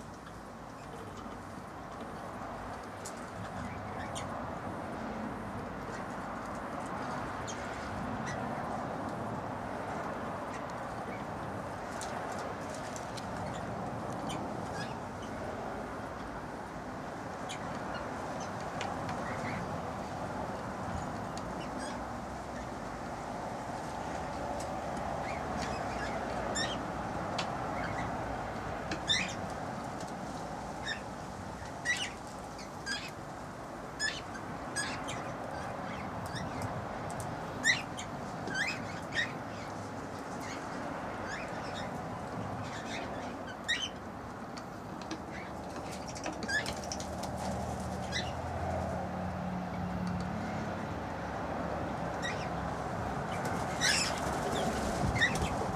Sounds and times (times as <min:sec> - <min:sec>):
Bird: 0:30.8 - 0:33.2, 0:37.6 - 0:42.0, 0:42.6 - 0:44.0, 0:45.0 - 0:48.4, 0:53.3 - 0:55.7.